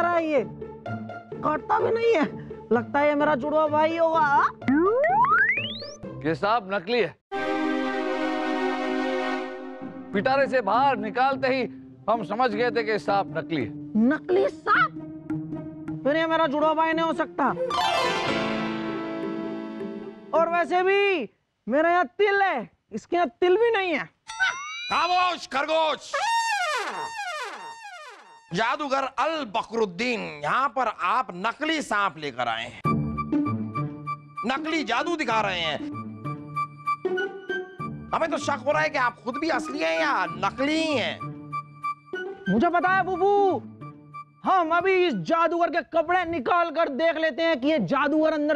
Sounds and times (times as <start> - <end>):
Music: 0.0 - 20.8, 32.8 - 45.4.